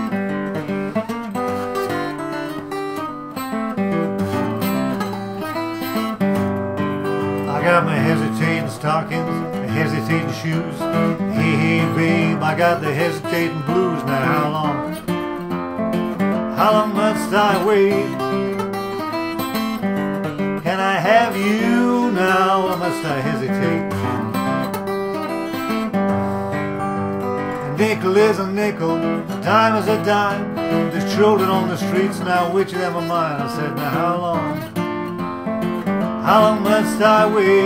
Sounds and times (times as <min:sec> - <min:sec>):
Acoustic guitar: 0:00.0 - 0:37.6.